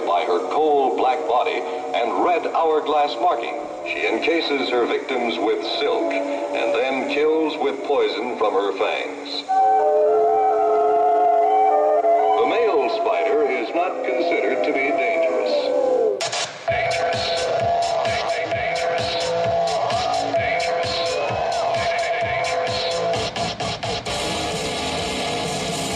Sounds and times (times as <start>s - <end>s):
Speech: 0.0s - 9.5s, 12.4s - 16.0s
Music: 0.0s - 25.9s.